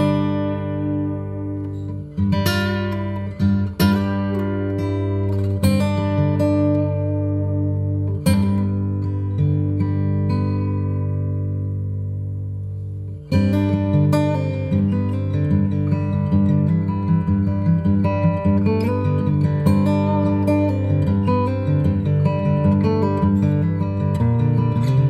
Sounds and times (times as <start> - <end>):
Acoustic guitar: 0.0 - 25.1
Strum: 0.0 - 25.1.